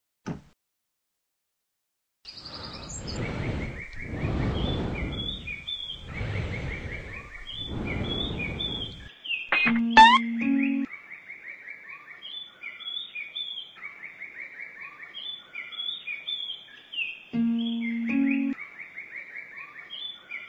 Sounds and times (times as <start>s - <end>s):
Chirp, tweet: 2.3s - 20.4s.